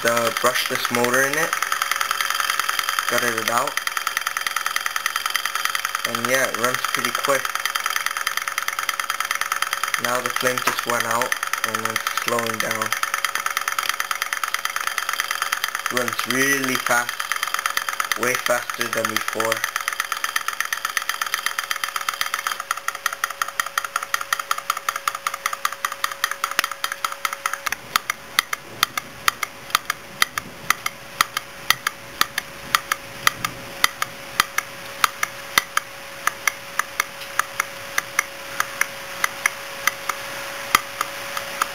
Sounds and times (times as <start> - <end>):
Speech: 0.0 - 1.5, 3.1 - 3.8, 6.1 - 7.5, 10.0 - 13.0, 15.9 - 17.1, 18.2 - 19.6
Medium engine (mid frequency): 0.0 - 41.7.